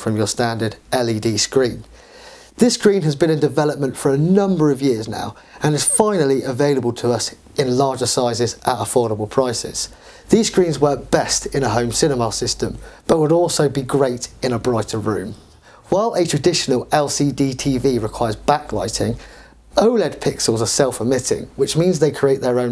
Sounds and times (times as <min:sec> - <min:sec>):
Speech: 0:00.0 - 0:01.9, 0:02.6 - 0:19.2, 0:19.8 - 0:22.7.